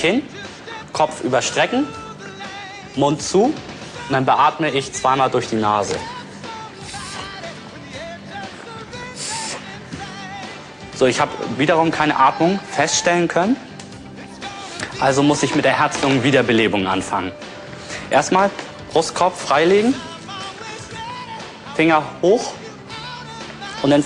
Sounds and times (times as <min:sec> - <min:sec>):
Music: 0:00.0 - 0:24.0
Speech: 0:01.0 - 0:02.0, 0:03.0 - 0:06.1, 0:11.0 - 0:13.6, 0:15.0 - 0:17.3, 0:18.1 - 0:20.0, 0:21.8 - 0:22.6.